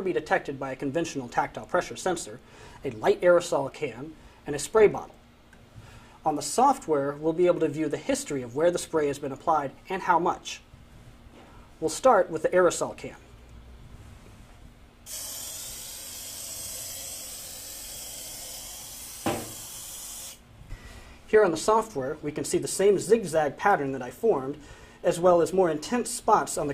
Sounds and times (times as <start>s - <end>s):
Speech: 0.0s - 5.2s, 6.2s - 10.7s, 11.8s - 13.3s, 21.3s - 26.7s
Spray: 15.1s - 20.4s.